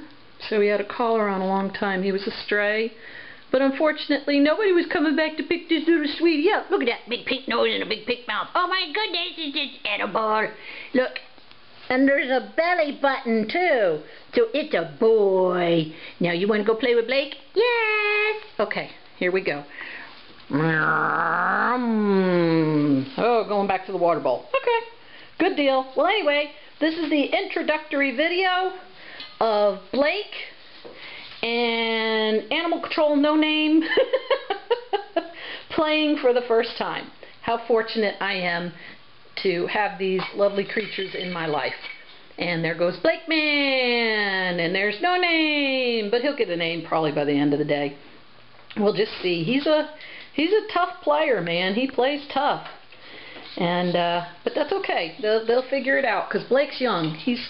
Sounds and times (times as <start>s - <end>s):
Speech: 0.4s - 19.7s, 21.5s - 30.6s, 31.4s - 34.5s, 35.7s - 38.8s, 39.4s - 48.0s, 48.7s - 52.8s, 53.6s - 57.4s.